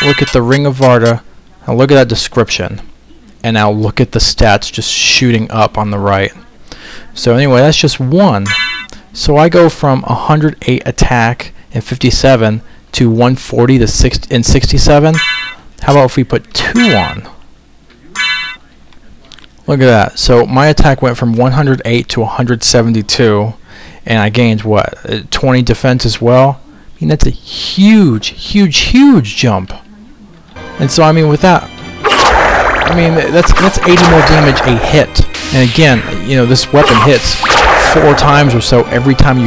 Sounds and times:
Speech: 0:00.0 - 0:15.2, 0:15.8 - 0:31.7, 0:32.9 - 0:39.4.

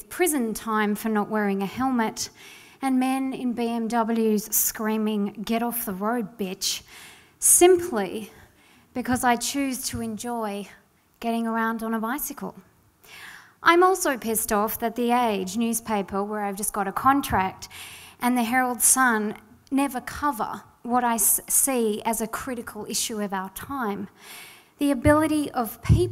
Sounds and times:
Speech: 0:00.0 - 0:06.8, 0:07.4 - 0:08.4, 0:09.0 - 0:12.6, 0:13.6 - 0:24.1, 0:24.8 - 0:26.1.

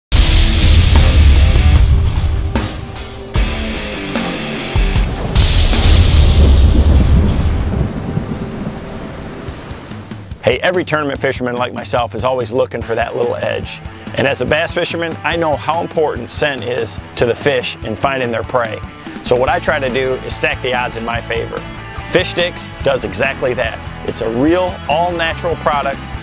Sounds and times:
Thunder: 0:00.1 - 0:03.0, 0:04.7 - 0:10.3
Rain: 0:05.0 - 0:10.4.

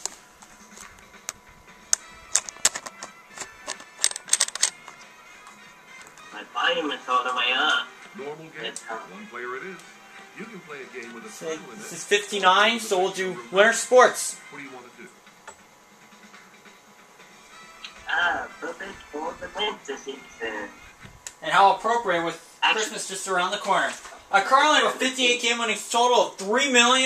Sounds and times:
Music: 0:00.0 - 0:27.0
Speech: 0:10.4 - 0:15.2, 0:18.1 - 0:20.8, 0:21.4 - 0:27.0.

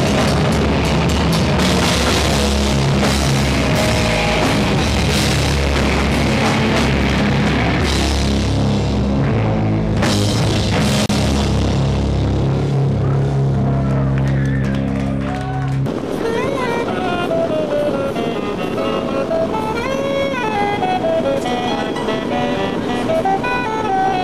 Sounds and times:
Music: 0:00.0 - 0:24.2.

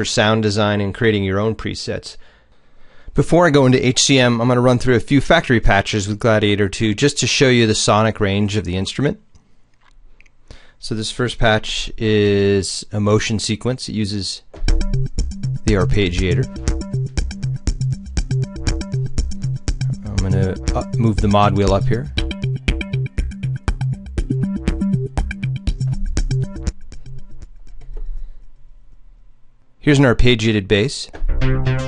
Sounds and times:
Speech: 0:00.0 - 0:02.2, 0:03.2 - 0:09.2, 0:10.8 - 0:14.5, 0:15.7 - 0:16.5, 0:20.0 - 0:22.1, 0:29.8 - 0:31.2.

